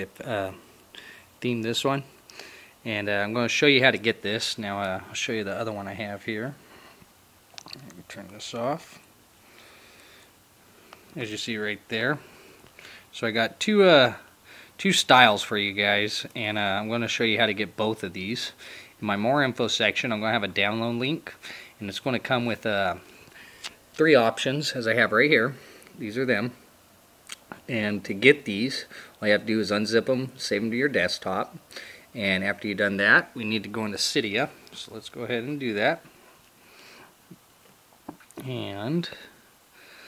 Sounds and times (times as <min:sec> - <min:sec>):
Speech: 0:00.0 - 0:00.6, 0:01.4 - 0:02.2, 0:02.8 - 0:06.6, 0:07.7 - 0:09.0, 0:11.2 - 0:12.3, 0:13.1 - 0:23.1, 0:24.0 - 0:26.6, 0:27.6 - 0:31.6, 0:32.2 - 0:36.1, 0:38.4 - 0:39.4.